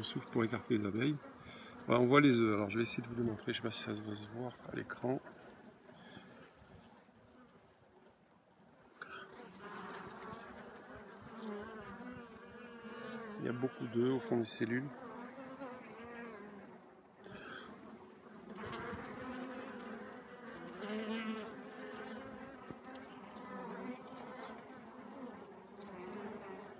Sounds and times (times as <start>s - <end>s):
Bee, wasp, etc.: 0.0s - 8.2s, 8.8s - 26.7s
Fly, housefly: 9.1s - 26.7s.